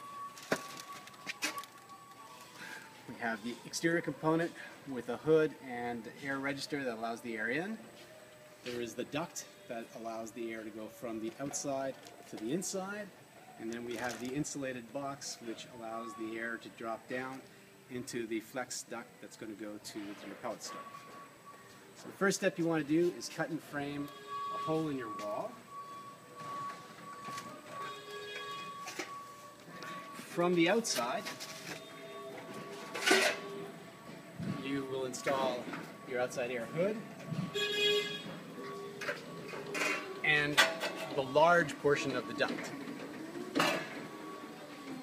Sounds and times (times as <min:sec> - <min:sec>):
Speech: 0:22.2 - 0:25.6, 0:34.6 - 0:37.0.